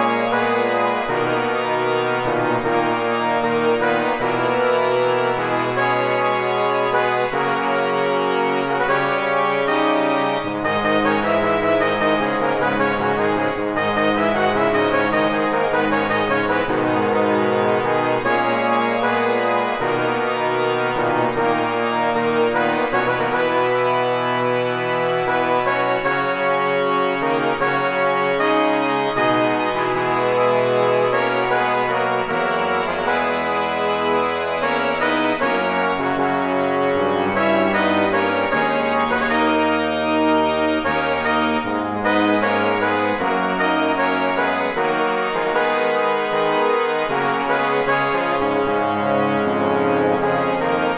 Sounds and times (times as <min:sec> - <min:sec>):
Musical instrument: 0:00.0 - 0:50.9.